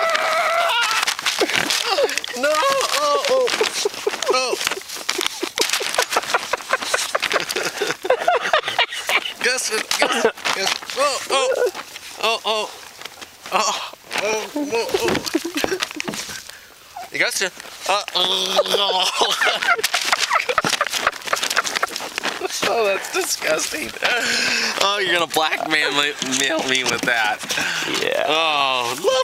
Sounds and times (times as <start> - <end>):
Speech: 24.8 - 29.2.